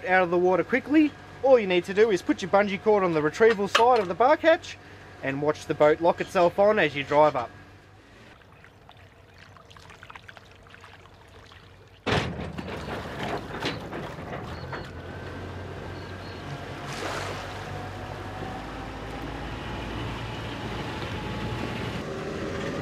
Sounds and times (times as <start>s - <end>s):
Speech: 0.0s - 7.6s
Boat, Water vehicle: 0.0s - 22.1s.